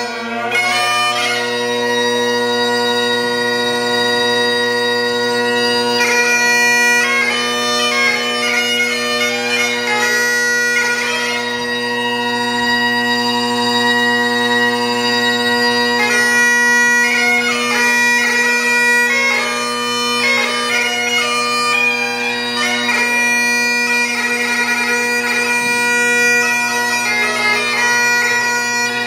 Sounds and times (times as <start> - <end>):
Bagpipes: 0.0 - 29.0.